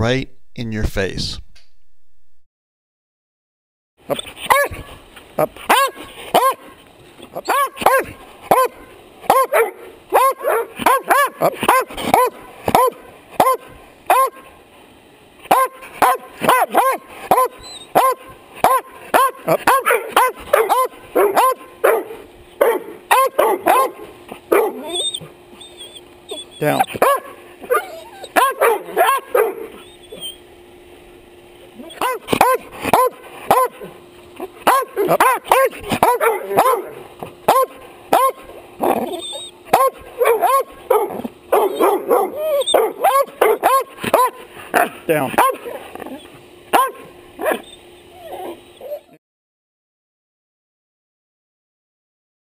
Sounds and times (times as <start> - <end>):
Speech: 0.0 - 1.4, 26.6 - 26.9, 45.1 - 45.4
Bow-wow: 4.4 - 4.9, 5.7 - 6.7, 7.4 - 14.4, 15.5 - 25.3, 26.3 - 30.2, 31.8 - 33.9, 34.6 - 49.1.